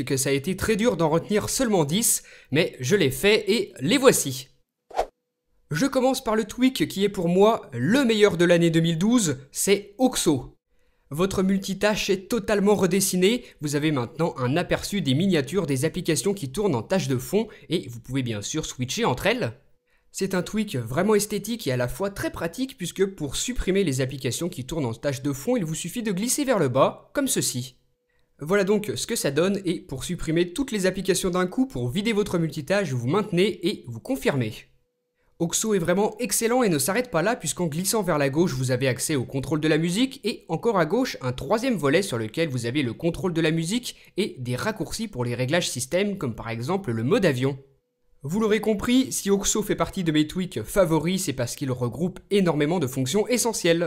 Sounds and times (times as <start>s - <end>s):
Speech: 0.0s - 4.6s, 5.7s - 19.6s, 20.2s - 27.8s, 28.4s - 34.7s, 35.4s - 47.6s, 48.2s - 53.8s.